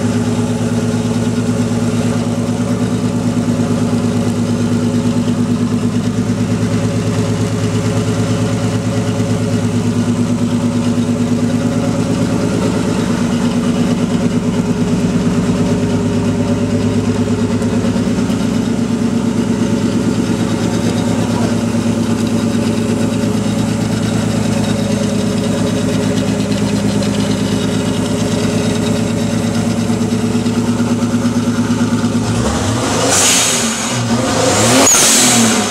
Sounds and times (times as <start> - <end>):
Idling: 0.0 - 34.4
Car: 0.0 - 35.7.